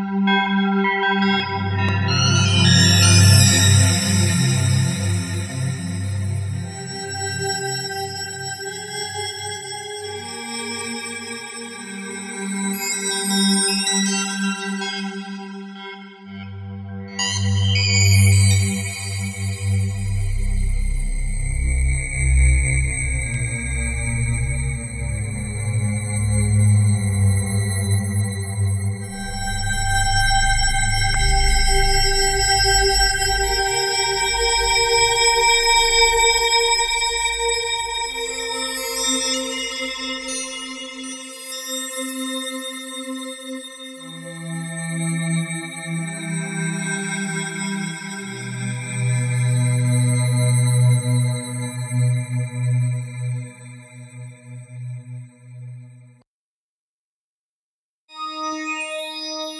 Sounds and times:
Synthesizer: 0.0 - 56.2.

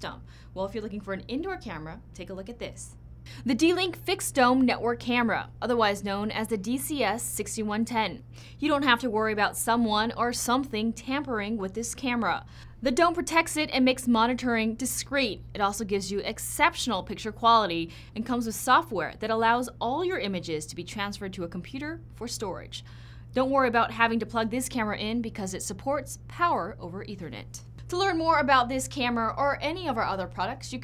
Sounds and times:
Speech: 0.0 - 22.8, 23.4 - 30.8.

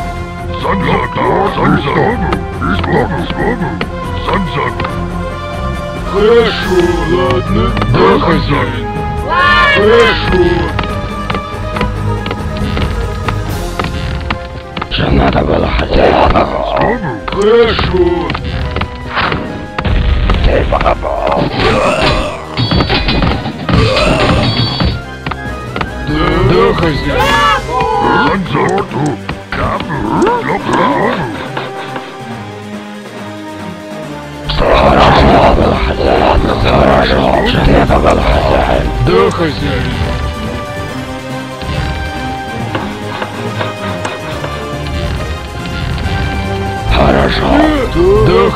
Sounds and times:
Music: 0.0 - 48.5
Speech: 0.6 - 4.8, 14.9 - 18.3, 26.1 - 31.4, 34.5 - 39.9, 46.9 - 48.5.

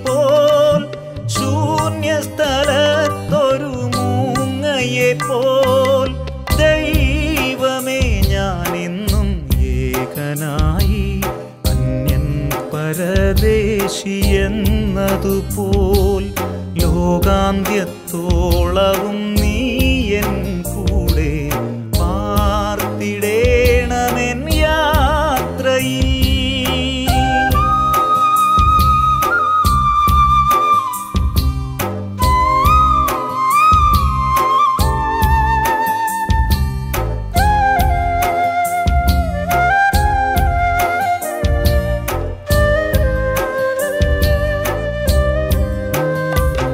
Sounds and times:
Music for children: 27.1 - 46.7.

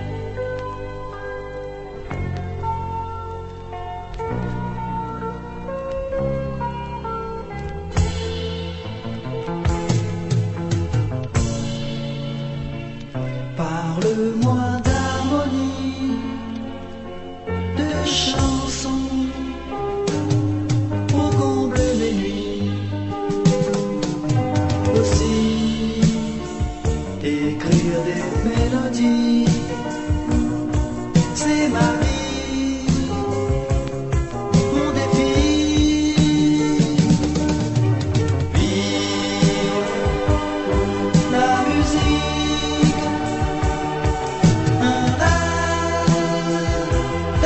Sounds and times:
Music: 0.0 - 47.4.

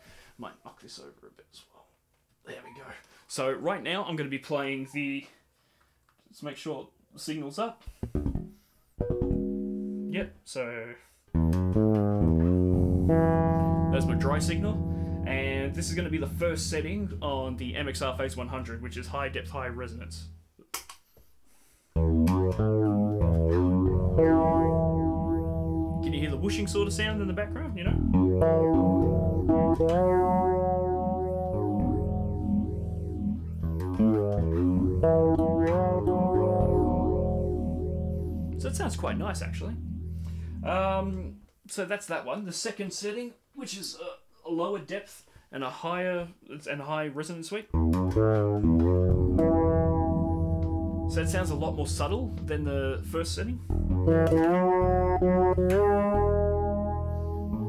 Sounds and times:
Speech: 0.4 - 5.4, 6.3 - 7.8, 10.1 - 11.0, 13.9 - 20.3, 26.0 - 28.0, 38.6 - 39.8, 40.6 - 47.7, 51.1 - 53.6
Effects unit: 7.9 - 10.2, 11.3 - 20.5, 22.0 - 41.4, 47.7 - 57.6
Bass guitar: 7.9 - 10.3, 11.3 - 20.6, 22.0 - 41.5, 47.7 - 57.6.

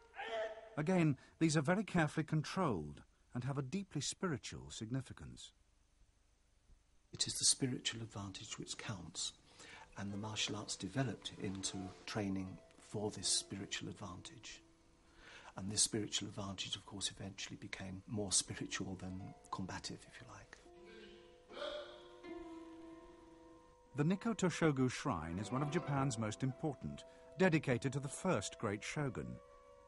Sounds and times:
Narration, monologue: 0.0 - 22.0, 22.8 - 29.8.

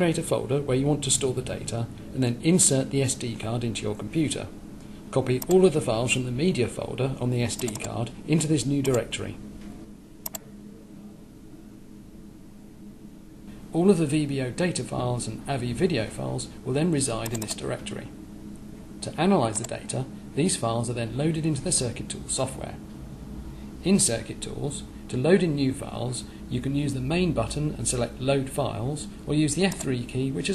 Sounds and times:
Speech: 0.0 - 9.4, 13.7 - 18.2, 19.0 - 22.8, 23.8 - 30.5.

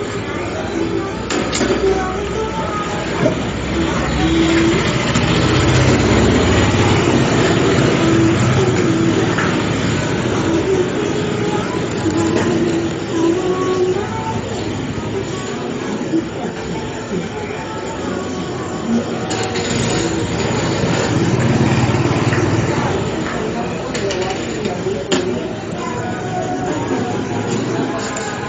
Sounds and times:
Music: 0.0 - 23.8, 24.8 - 28.4
Vehicle: 0.0 - 28.4.

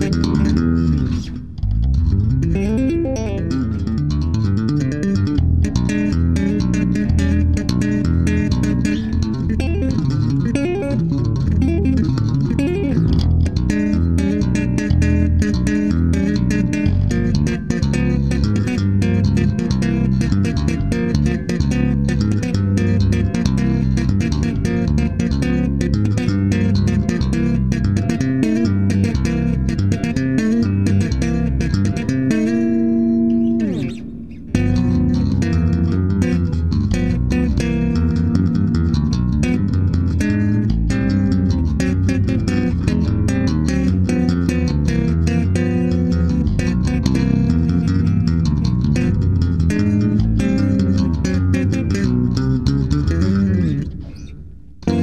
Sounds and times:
Bass guitar: 0.0 - 55.0
Inside, small room: 0.0 - 55.0.

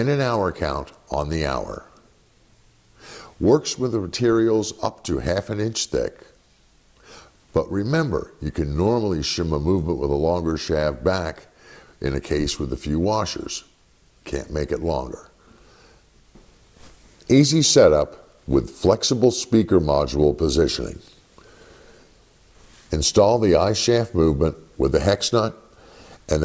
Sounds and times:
Speech: 0.0 - 2.0, 3.4 - 6.4, 7.5 - 15.4, 17.3 - 21.2, 22.9 - 25.7.

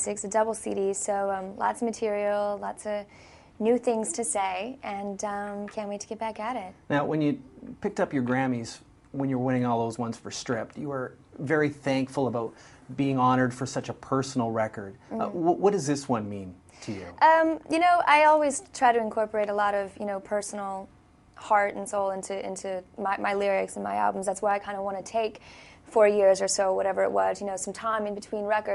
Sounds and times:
Speech: 3.6 - 20.8.

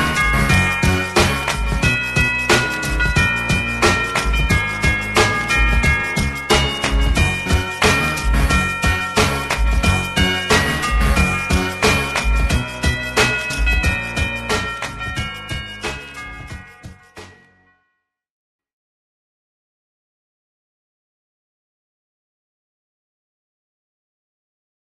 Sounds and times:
Music: 0.0 - 18.1.

